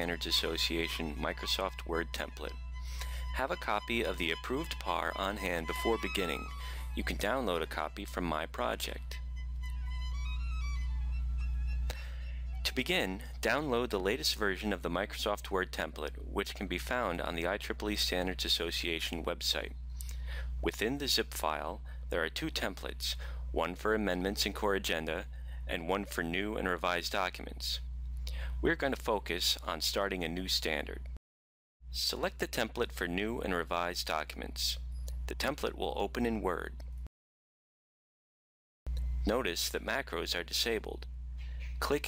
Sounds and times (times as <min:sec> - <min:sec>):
Speech: 0:00.0 - 0:02.5, 0:03.4 - 0:09.2, 0:12.7 - 0:19.8, 0:20.6 - 0:27.8, 0:28.6 - 0:31.1, 0:31.9 - 0:36.8, 0:39.2 - 0:41.1, 0:41.8 - 0:42.0
Music: 0:00.0 - 0:12.8.